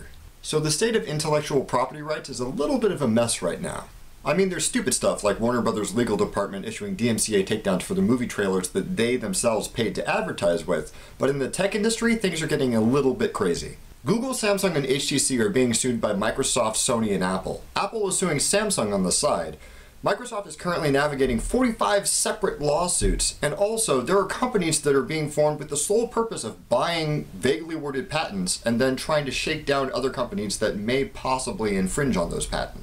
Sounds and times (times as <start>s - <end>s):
Speech: 0.0s - 32.8s.